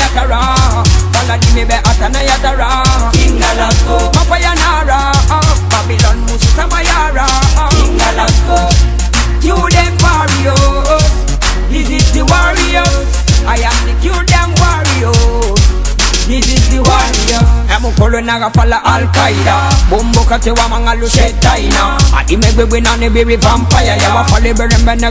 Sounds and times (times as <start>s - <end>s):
Music: 0.0s - 25.1s.